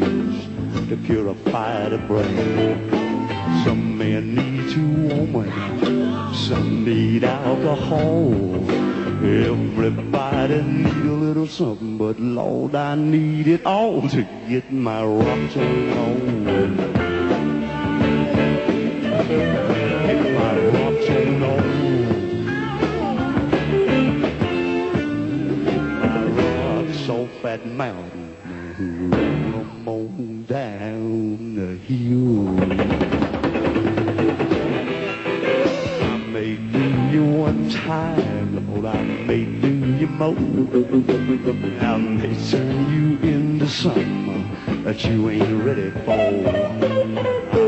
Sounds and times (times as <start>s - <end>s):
Drum: 0.0s - 11.2s, 15.2s - 27.0s, 32.5s - 47.6s
Drum kit: 0.0s - 11.8s, 13.5s - 28.1s, 29.2s - 29.9s, 32.2s - 47.6s
Singing: 0.0s - 32.8s, 35.5s - 47.6s
Bass guitar: 0.0s - 47.6s
Blues: 0.0s - 47.6s.